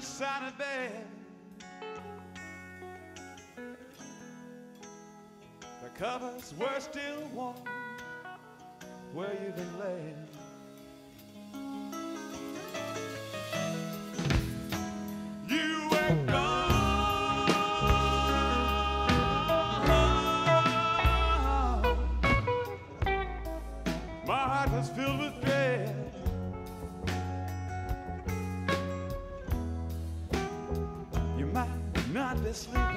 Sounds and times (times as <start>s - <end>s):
Music: 0.0s - 32.9s.